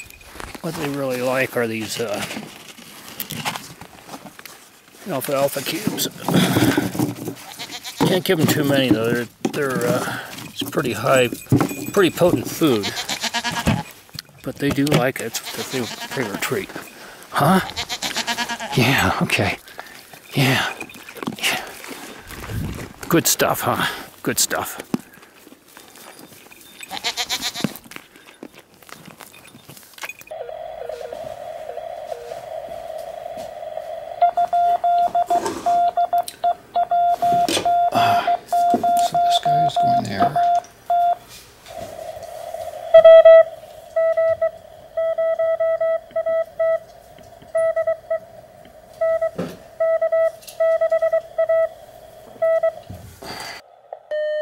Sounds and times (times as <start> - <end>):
Speech: 0.6 - 2.3, 5.0 - 6.2, 14.4 - 16.7
Goat: 11.9 - 14.0, 14.9 - 22.9, 25.0 - 30.3.